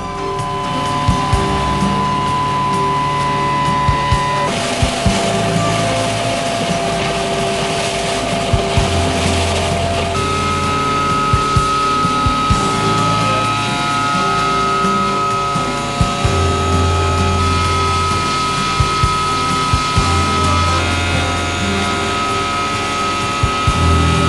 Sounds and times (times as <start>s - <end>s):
Music: 0.0s - 24.2s.